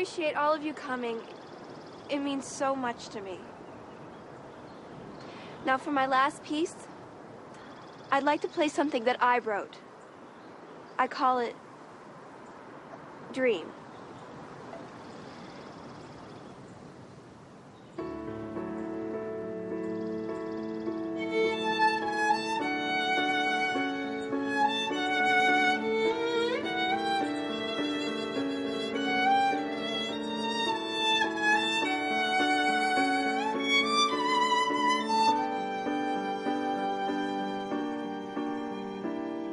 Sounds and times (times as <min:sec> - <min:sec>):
Violin, fiddle: 0:20.8 - 0:39.5.